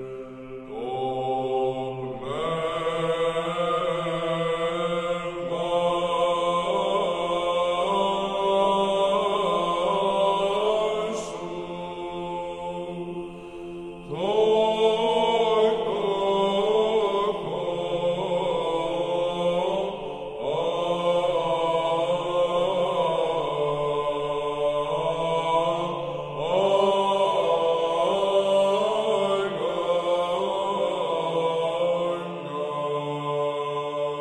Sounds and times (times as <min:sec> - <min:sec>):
Mantra: 0:00.0 - 0:34.2.